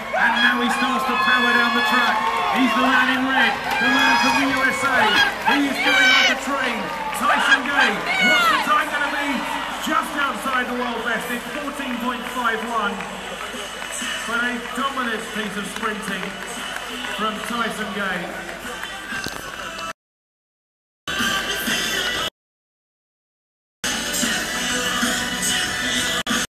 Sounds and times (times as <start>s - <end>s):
Speech: 0.2s - 16.4s, 17.1s - 19.2s
Music: 0.7s - 20.0s, 21.1s - 22.3s, 23.8s - 26.5s
Outside, urban or manmade: 23.8s - 26.5s.